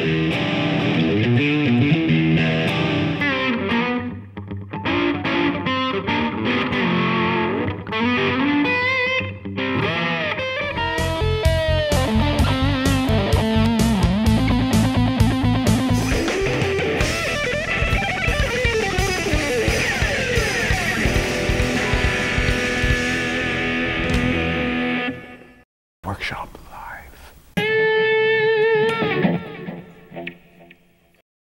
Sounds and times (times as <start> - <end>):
Electric guitar: 0.0 - 25.6, 27.6 - 31.2
Speech: 26.0 - 27.4.